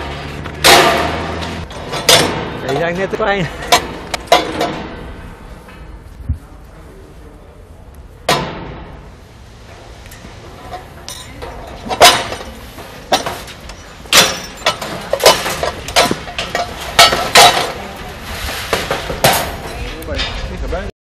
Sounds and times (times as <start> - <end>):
Speech: 2.6 - 3.6, 19.7 - 20.9.